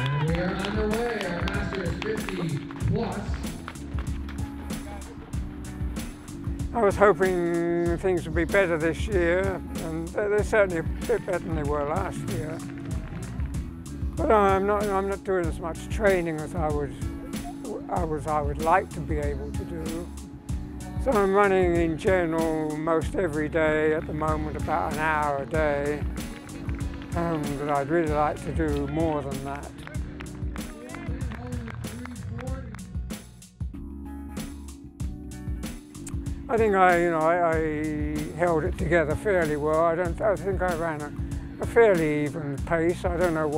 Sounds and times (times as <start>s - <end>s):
Music: 0.0s - 43.5s.